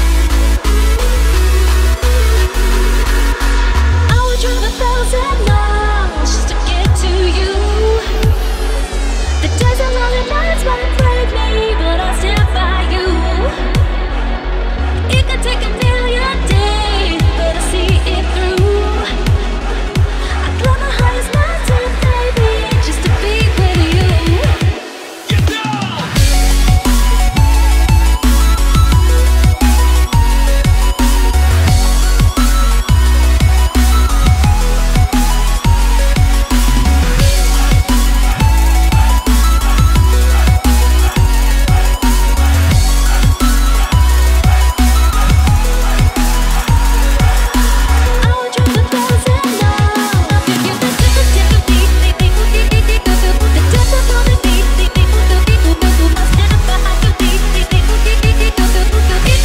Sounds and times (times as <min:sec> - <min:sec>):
Electronic dance music: 0:00.0 - 0:59.4.